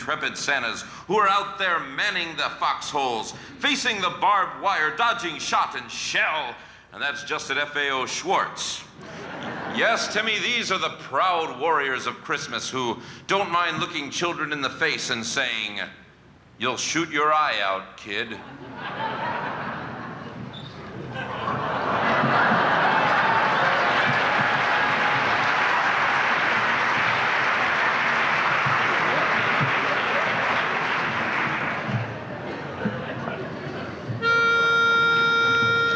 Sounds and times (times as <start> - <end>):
Applause: 22.2 - 32.3.